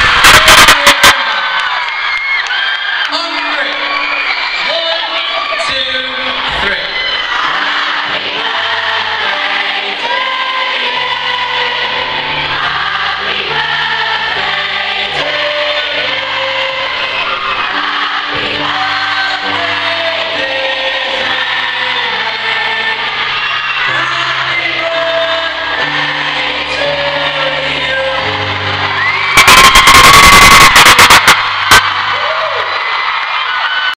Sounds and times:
Music: 0:02.4 - 0:33.9
Male singing: 0:18.6 - 0:23.1, 0:23.9 - 0:28.8.

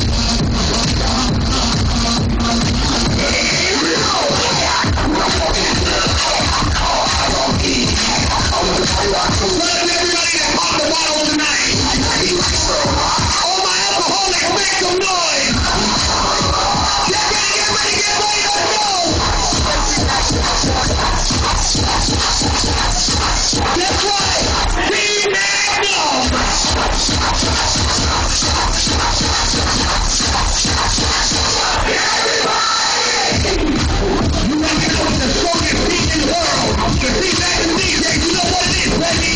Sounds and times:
Music: 0:00.0 - 0:39.3
Speech: 0:09.2 - 0:12.4, 0:13.4 - 0:15.6, 0:23.8 - 0:26.3, 0:34.4 - 0:39.3.

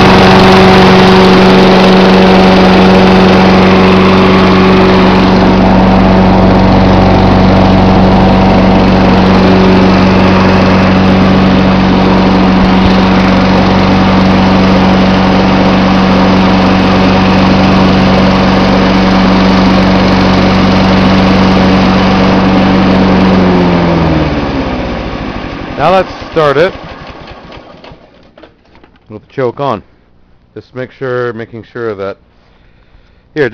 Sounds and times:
Lawn mower: 0:00.0 - 0:29.0
Speech: 0:25.8 - 0:26.8, 0:29.1 - 0:29.9, 0:30.6 - 0:32.2.

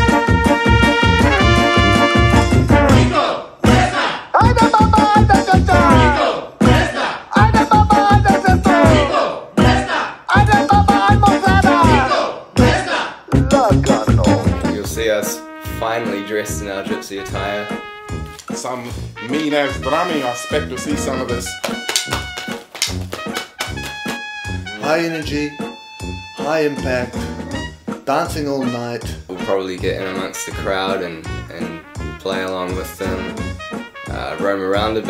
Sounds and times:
Brass instrument: 0:00.0 - 0:35.1
Speech: 0:13.4 - 0:17.8, 0:18.6 - 0:21.5, 0:24.8 - 0:25.6, 0:26.4 - 0:33.4, 0:34.1 - 0:35.1.

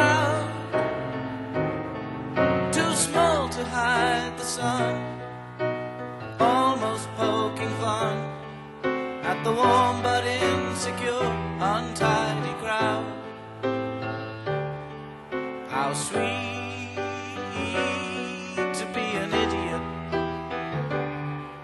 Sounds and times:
Music: 0:00.0 - 0:21.6.

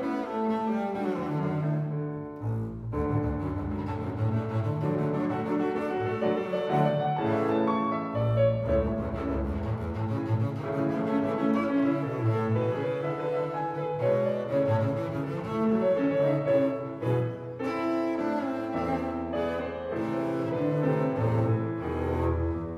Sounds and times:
Classical music: 0:00.0 - 0:22.7.

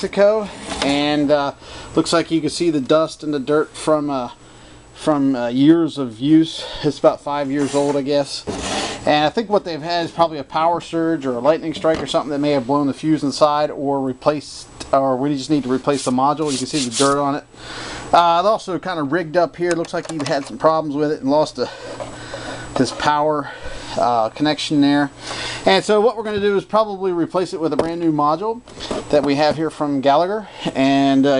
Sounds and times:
Speech: 0:00.0 - 0:04.4, 0:05.0 - 0:17.5, 0:18.1 - 0:21.8, 0:22.8 - 0:31.3.

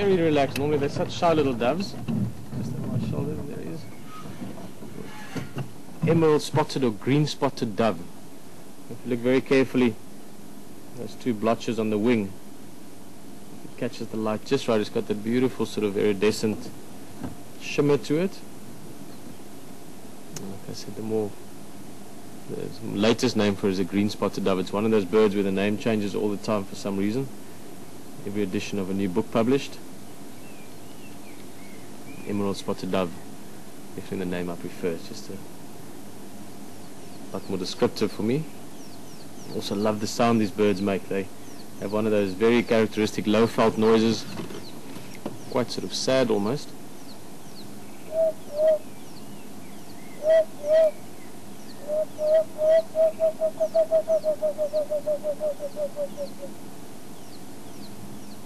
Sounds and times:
Speech: 0:00.0 - 0:02.0, 0:02.6 - 0:03.9, 0:06.0 - 0:08.1, 0:08.9 - 0:10.0, 0:11.0 - 0:12.4, 0:13.8 - 0:16.8, 0:17.6 - 0:18.5, 0:20.4 - 0:21.4, 0:22.5 - 0:27.3, 0:28.2 - 0:29.8, 0:32.3 - 0:33.2, 0:34.0 - 0:35.5, 0:37.4 - 0:38.5, 0:39.5 - 0:44.4, 0:45.5 - 0:46.8.

